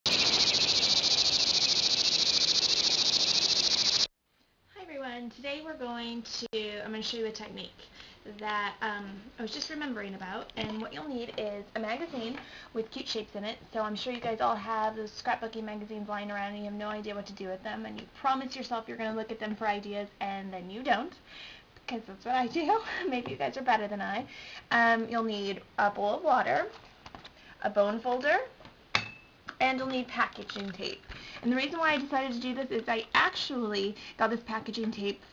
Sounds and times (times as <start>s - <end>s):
Speech: 4.7s - 21.2s, 21.9s - 26.8s, 27.6s - 28.6s, 29.6s - 35.2s.